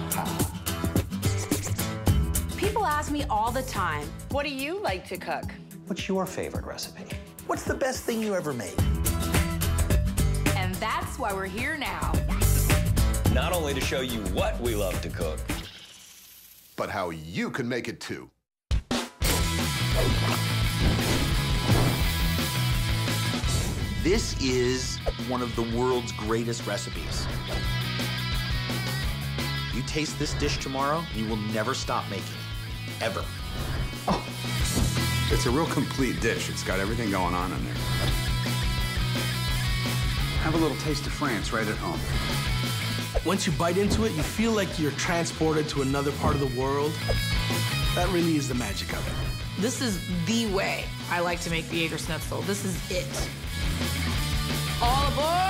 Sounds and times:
Music: 0.0s - 15.8s, 18.7s - 55.4s.

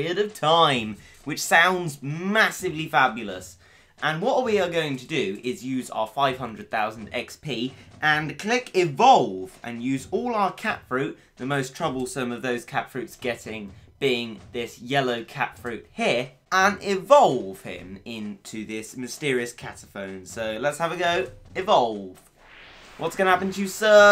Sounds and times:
Speech: 0.0s - 22.3s, 23.0s - 24.1s.

